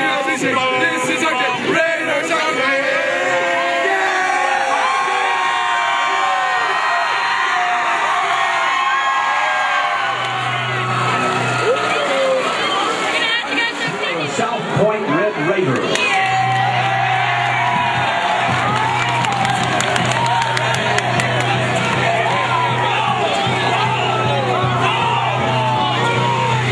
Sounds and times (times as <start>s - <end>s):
Crowd: 0.0s - 26.7s.